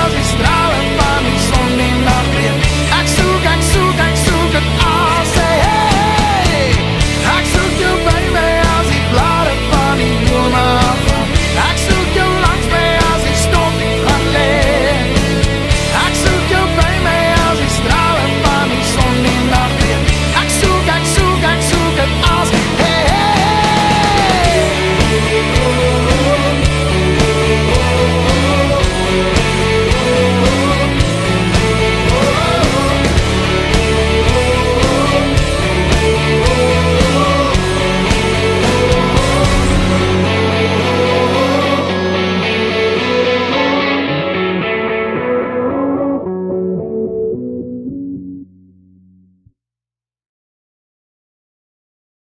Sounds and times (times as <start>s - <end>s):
Music: 0.0s - 49.6s.